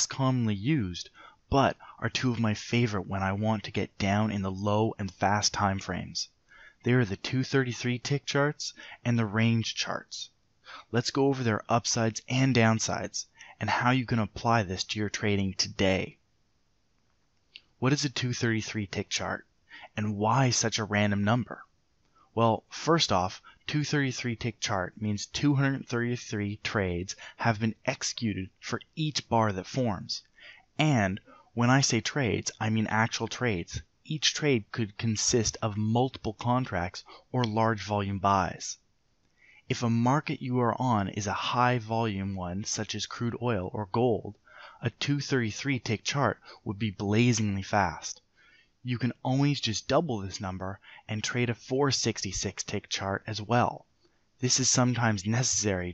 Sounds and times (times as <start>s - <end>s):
Speech: 0.0s - 16.2s, 17.8s - 21.7s, 22.4s - 38.8s, 39.7s - 48.2s, 48.8s - 53.8s, 54.4s - 55.9s.